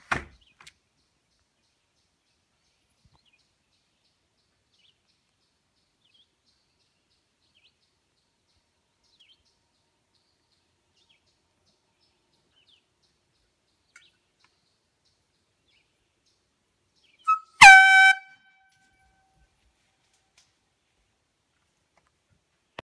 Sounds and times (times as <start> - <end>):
Outside, rural or natural: 0.0 - 22.8
Air horn, truck horn: 17.3 - 18.9.